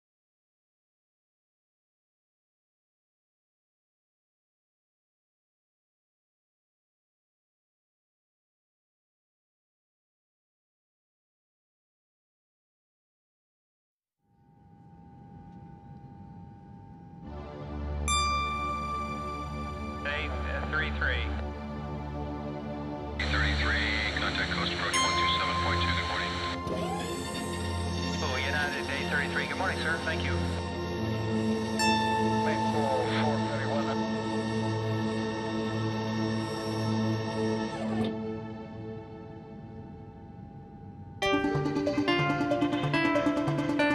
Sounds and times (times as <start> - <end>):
Music: 14.2 - 43.9
Speech: 20.0 - 21.4, 23.2 - 26.6, 28.2 - 30.4, 32.4 - 34.0.